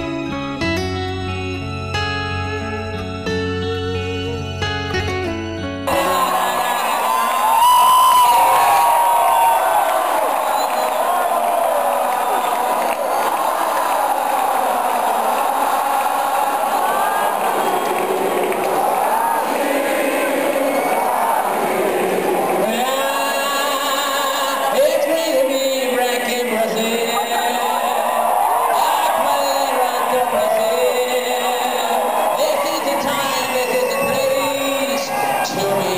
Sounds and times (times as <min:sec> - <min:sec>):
Male singing: 0:22.6 - 0:35.9.